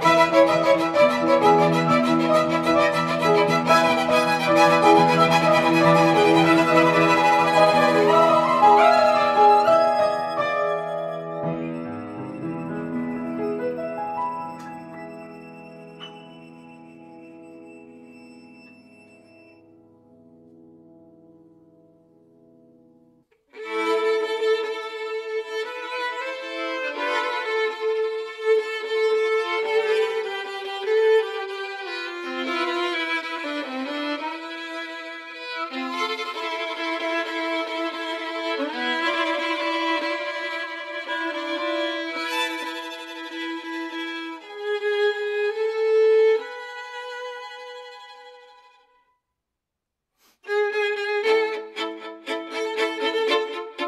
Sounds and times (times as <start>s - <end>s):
Violin, fiddle: 0.0s - 19.6s, 23.4s - 49.0s, 50.5s - 53.8s.